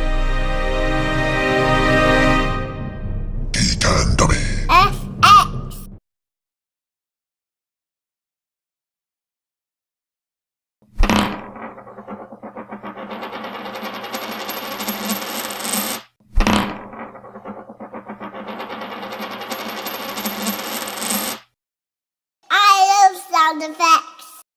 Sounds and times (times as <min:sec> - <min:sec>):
Coin (dropping): 0:11.1 - 0:21.5.